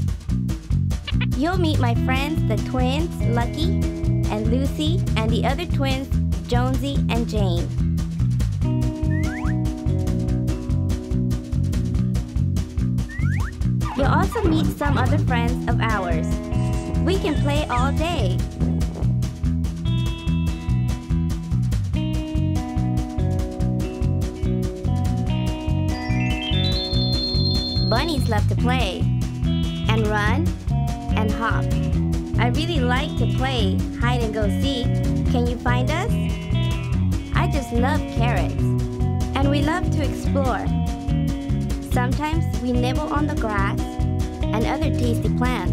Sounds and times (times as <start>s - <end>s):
Music: 0.0s - 45.7s
Speech: 1.2s - 7.7s, 13.9s - 16.4s, 17.0s - 18.4s, 27.9s - 29.1s, 29.9s - 30.5s, 31.1s - 31.7s, 32.4s - 36.3s, 37.4s - 38.7s, 39.4s - 40.8s, 41.8s - 45.7s.